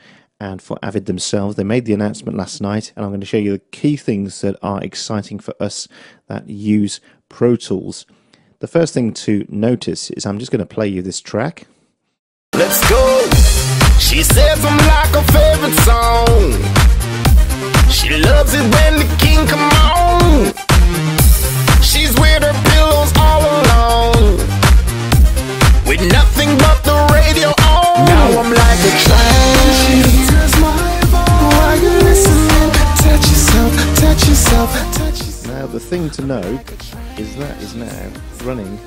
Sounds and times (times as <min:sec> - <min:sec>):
Speech: 0:00.4 - 0:11.7, 0:25.9 - 0:26.6, 0:27.4 - 0:30.0, 0:31.7 - 0:32.6, 0:35.4 - 0:38.8
Music: 0:12.5 - 0:38.8.